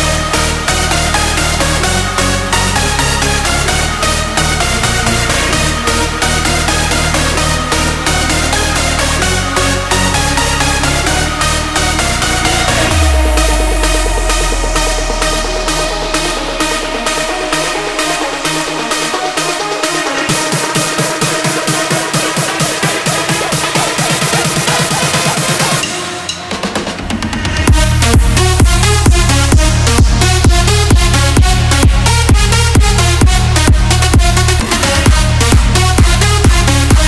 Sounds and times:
Music: 0.0 - 37.0.

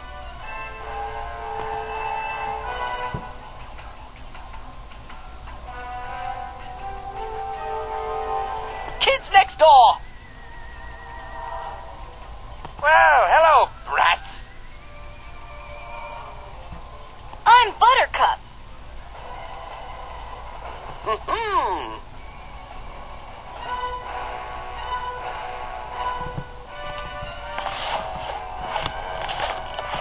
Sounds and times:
Speech: 17.5 - 18.4.

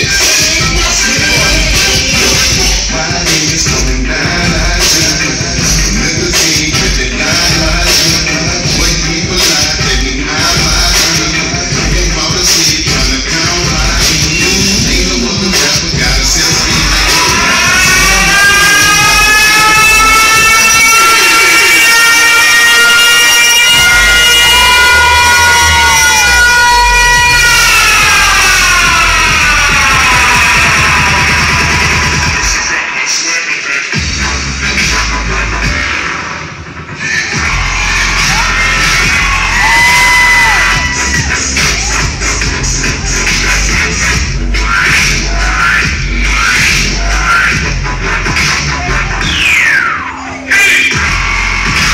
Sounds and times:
Dubstep: 0.0 - 51.9.

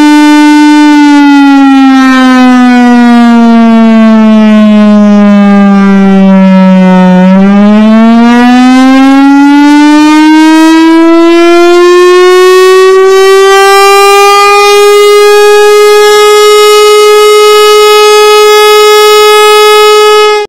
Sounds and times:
Civil defense siren: 0.0 - 20.4.

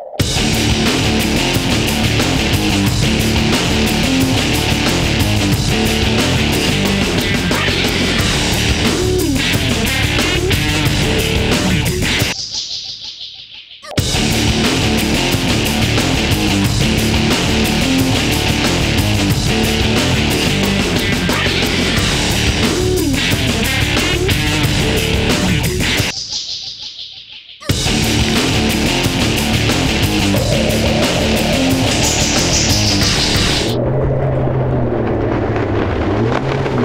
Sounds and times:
Music: 0.0 - 33.8.

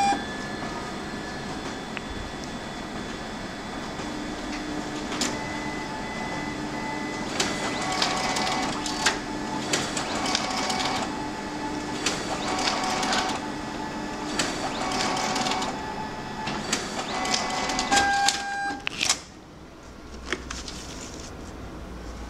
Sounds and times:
Printer: 0.0 - 22.2.

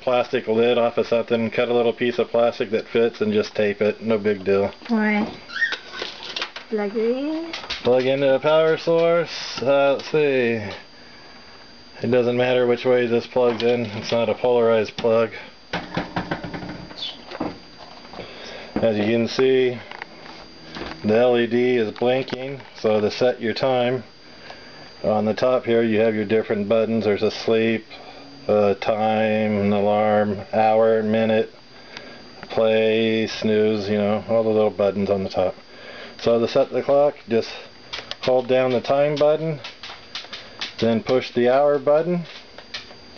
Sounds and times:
Speech: 0.0 - 5.3, 6.8 - 10.8, 12.0 - 15.5, 18.8 - 19.8, 21.0 - 24.1, 25.0 - 27.9, 28.5 - 31.5, 36.2 - 39.6, 40.8 - 42.3.

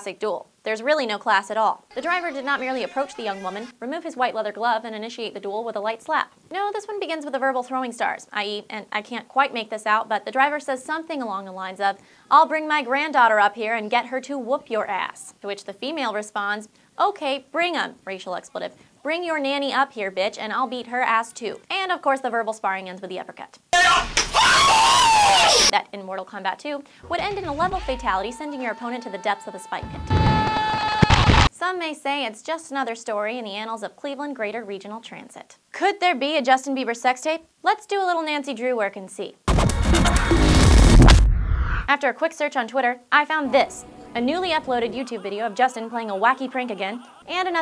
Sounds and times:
Speech: 0.0 - 24.1, 25.7 - 29.9, 31.6 - 39.4, 41.9 - 47.6.

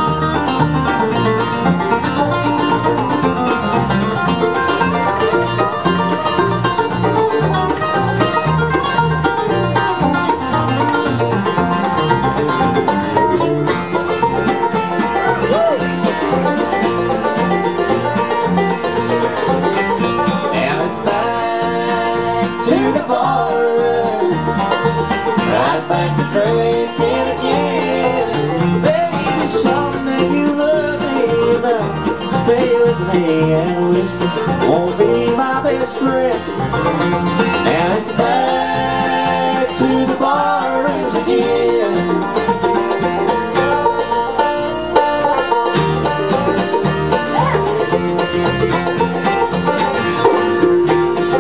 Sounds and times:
Banjo: 0.0 - 51.4
Bluegrass: 0.0 - 51.4
Singing: 20.5 - 24.4, 25.4 - 34.1, 37.6 - 42.2.

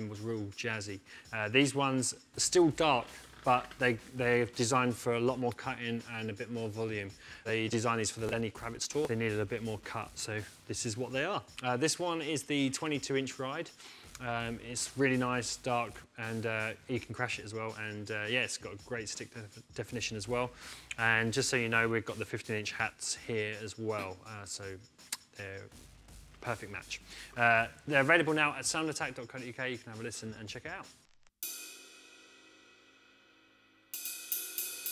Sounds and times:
Speech: 0.0 - 24.8, 25.4 - 25.7, 26.4 - 30.9.

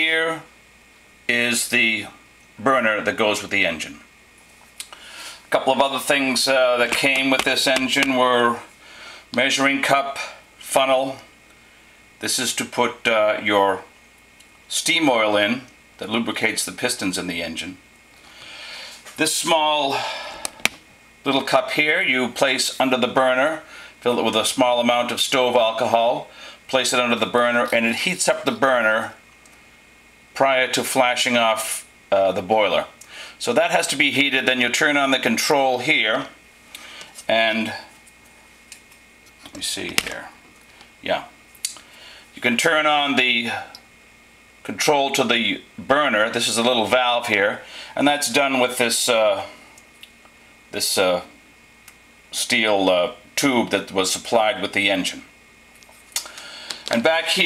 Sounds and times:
Speech: 0.0 - 0.6, 1.3 - 4.1, 5.5 - 8.7, 9.4 - 11.3, 12.2 - 14.0, 14.7 - 17.8, 19.2 - 20.2, 21.2 - 29.2, 30.4 - 36.4, 37.3 - 38.0, 39.4 - 40.4, 41.0 - 41.4, 42.4 - 43.9, 44.6 - 49.7, 50.7 - 51.4, 52.3 - 55.3, 56.9 - 57.4.

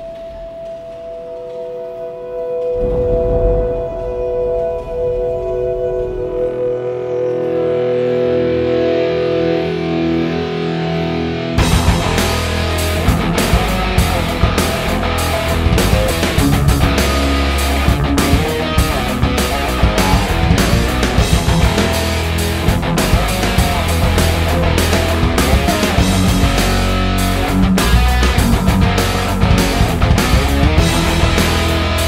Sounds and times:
Heavy metal: 0.0 - 32.0.

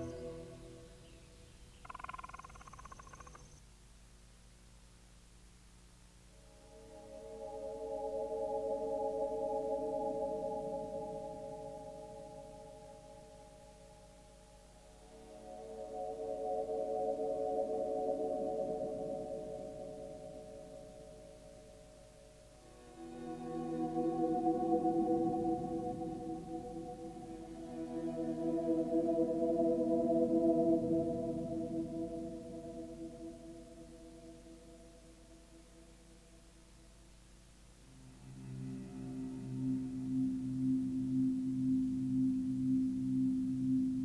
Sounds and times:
Music: 0.0 - 1.6, 6.4 - 36.6, 37.8 - 44.0.

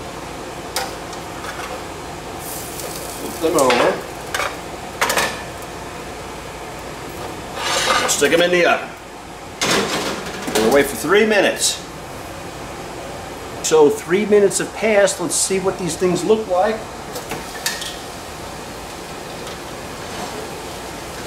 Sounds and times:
Sizzle: 0.6 - 7.7, 17.2 - 21.2.

